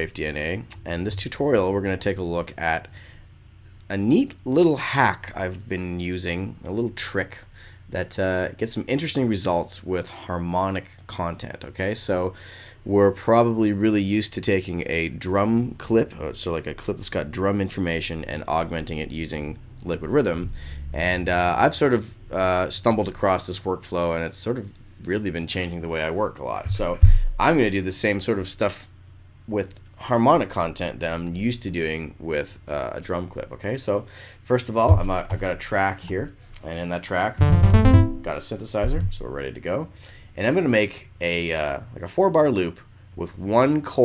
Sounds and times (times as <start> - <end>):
Speech: 0.0 - 2.9, 3.9 - 28.9, 29.5 - 37.4, 38.0 - 44.0.